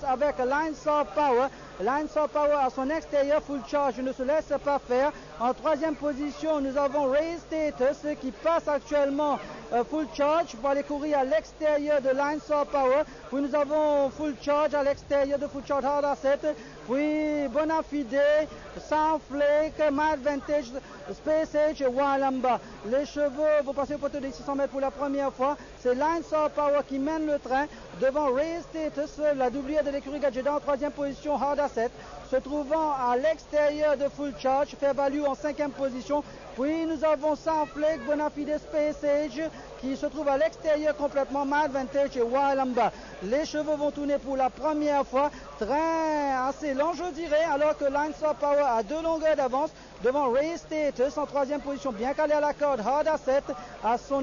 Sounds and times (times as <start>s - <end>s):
Speech: 0.0s - 54.2s.